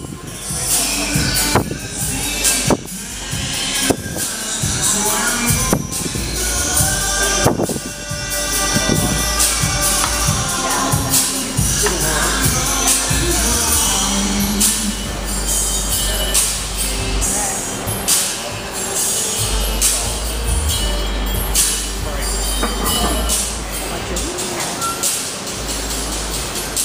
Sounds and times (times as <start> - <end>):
Music: 0.0 - 26.8
Speech: 10.6 - 14.4, 21.6 - 25.1.